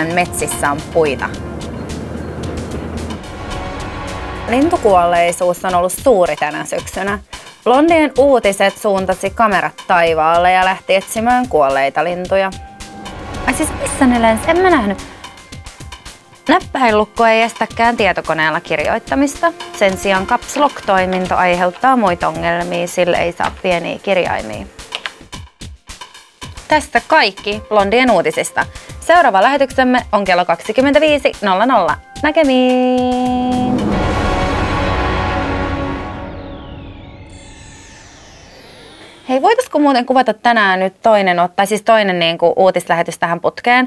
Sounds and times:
Speech: 0.0s - 1.4s, 4.5s - 12.6s, 16.5s - 24.7s, 26.7s - 33.7s, 39.3s - 43.8s
Music: 0.0s - 40.1s.

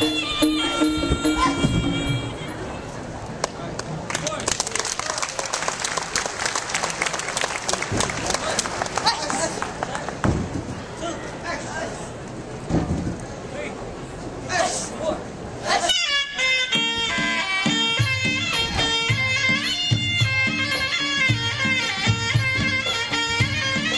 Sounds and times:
Applause: 3.4s - 10.2s.

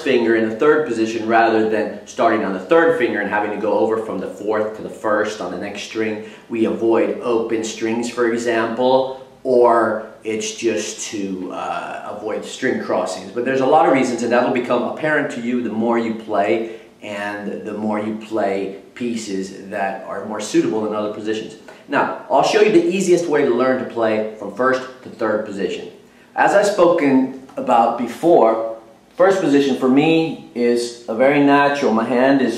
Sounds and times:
Speech: 0.0s - 32.5s.

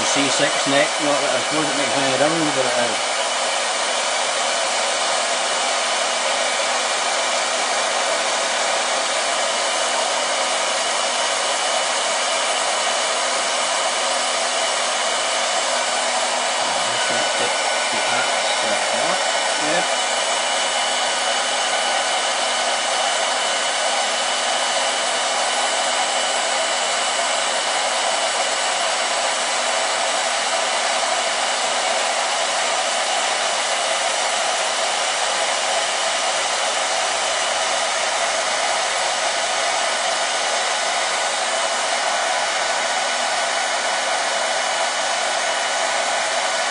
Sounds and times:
Power tool: 0.0s - 46.7s.

